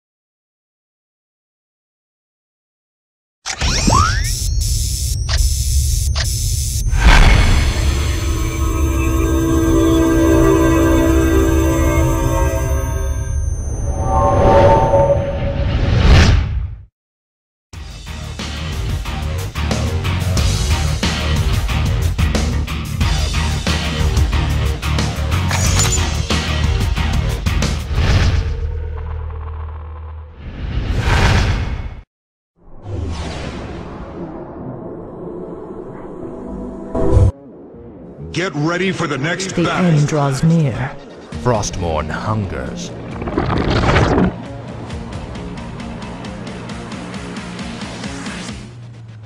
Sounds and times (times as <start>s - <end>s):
Music: 7.0s - 14.8s, 17.8s - 28.2s, 35.8s - 49.2s.